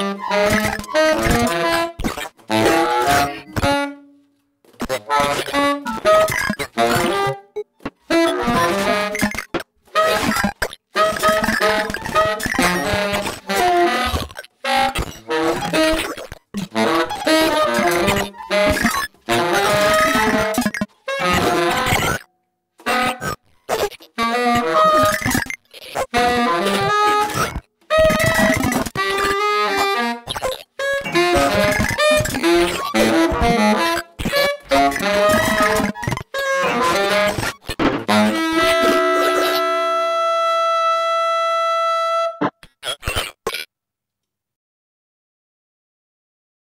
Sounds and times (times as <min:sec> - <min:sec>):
Saxophone: 0:00.0 - 0:04.3, 0:04.9 - 0:22.2, 0:22.8 - 0:25.3, 0:26.0 - 0:42.6.